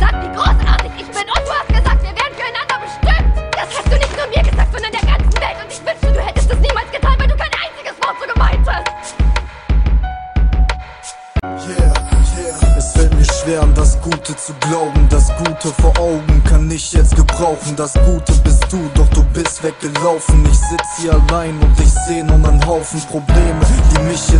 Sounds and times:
Music: 0.0s - 24.3s.

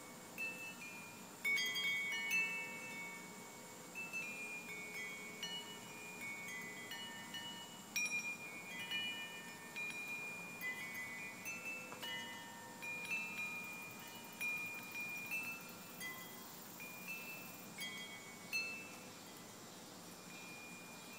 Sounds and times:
Wind chime: 0.0s - 21.1s.

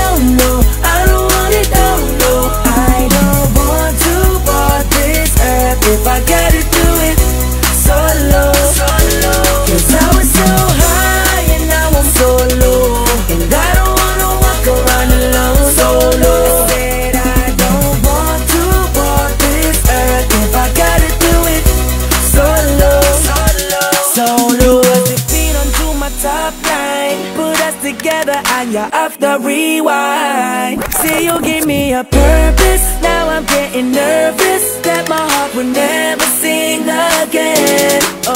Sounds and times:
Rhythm and blues: 0.0s - 29.6s, 30.6s - 38.3s.

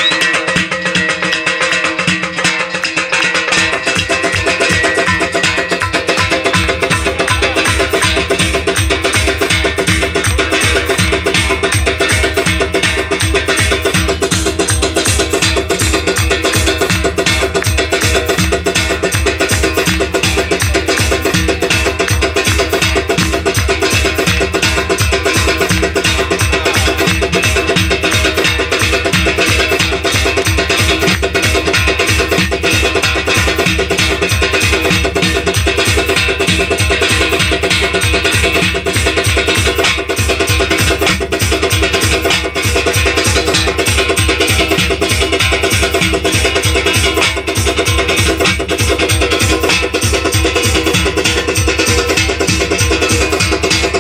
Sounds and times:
Music: 0.0s - 54.0s.

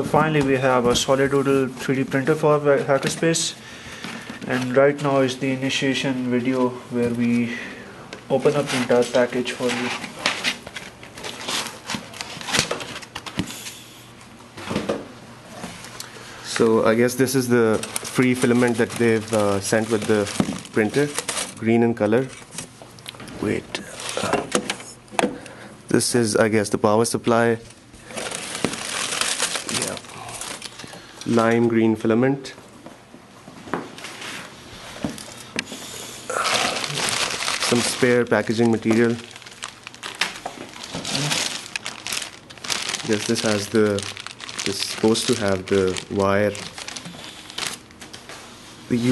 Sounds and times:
Speech: 0.0s - 3.6s, 4.5s - 7.7s, 8.3s - 10.1s, 16.5s - 22.4s, 23.3s - 24.4s, 25.9s - 27.7s, 29.7s - 30.2s, 31.3s - 32.6s, 37.6s - 39.3s, 41.1s - 41.4s, 43.0s - 46.7s, 48.9s - 49.1s.

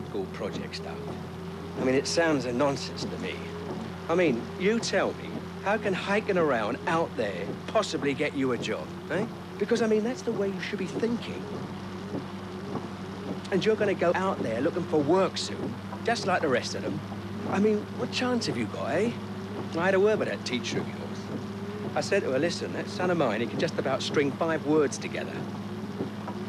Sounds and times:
Speech: 0.0s - 1.1s, 1.8s - 3.5s, 4.1s - 11.5s, 13.5s - 19.2s, 19.8s - 21.2s, 22.0s - 25.4s.

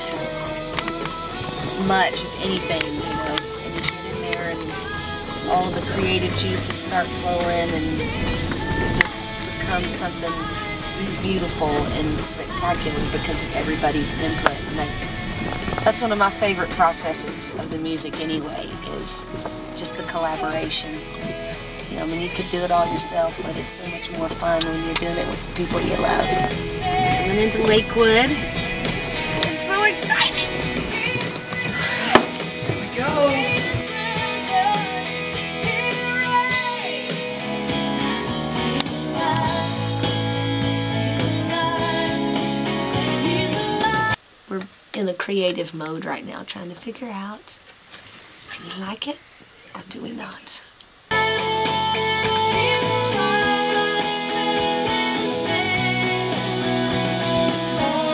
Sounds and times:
Music: 0.0s - 44.2s, 51.1s - 58.1s
Speech: 1.8s - 4.8s, 5.4s - 8.2s, 8.9s - 15.1s, 15.8s - 21.1s, 21.9s - 28.4s, 29.4s - 30.6s, 32.9s - 33.6s, 44.5s - 47.6s, 48.5s - 50.7s.

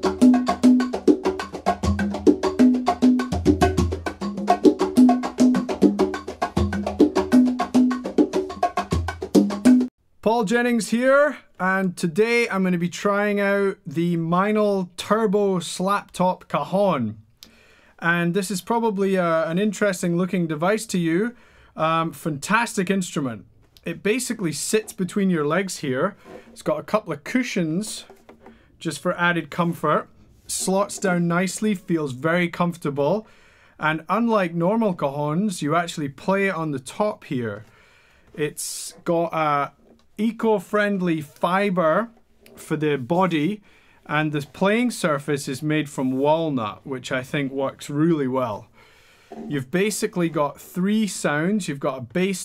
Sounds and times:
Percussion: 0.0s - 9.9s
Speech: 10.2s - 17.2s, 18.0s - 28.1s, 28.8s - 37.7s, 38.4s - 48.7s, 49.5s - 52.4s.

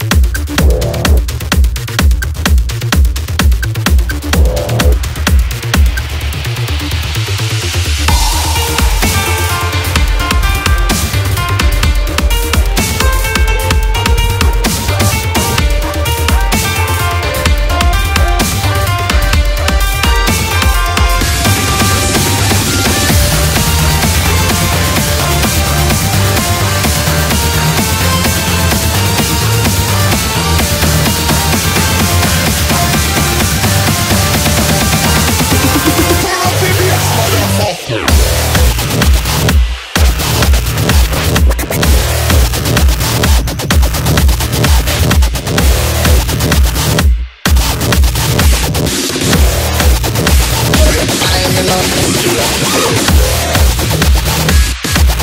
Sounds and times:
Dubstep: 0.0s - 55.2s.

